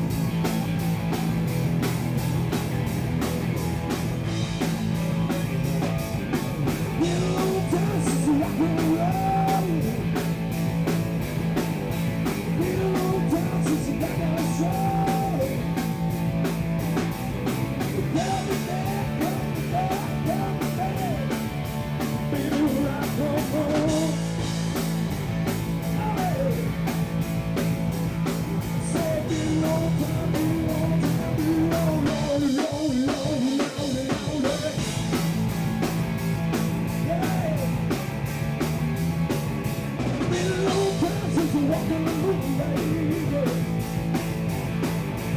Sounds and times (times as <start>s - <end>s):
Rock and roll: 0.0s - 45.3s.